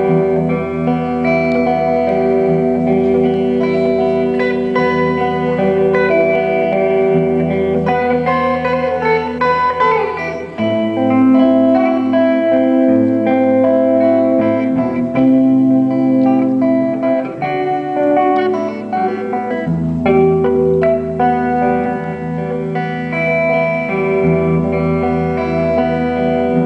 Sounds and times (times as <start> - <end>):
Acoustic guitar: 0.0 - 26.6
Bass guitar: 0.0 - 26.6.